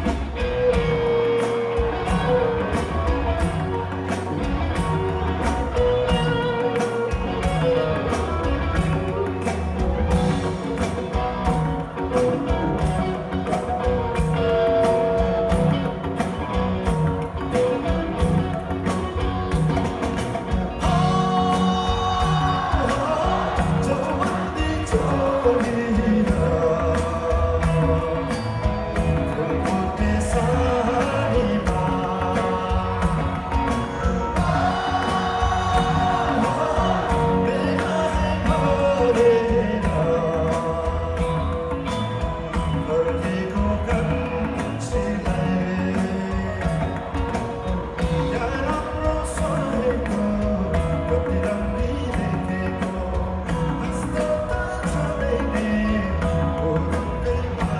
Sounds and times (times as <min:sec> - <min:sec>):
Music: 0:00.0 - 0:57.7.